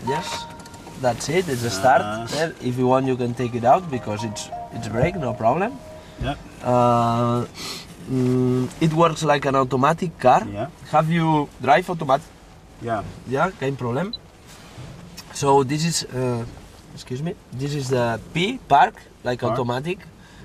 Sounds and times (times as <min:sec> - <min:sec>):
Speech: 0:01.0 - 0:07.5, 0:08.1 - 0:12.2, 0:12.8 - 0:14.2, 0:15.2 - 0:20.0.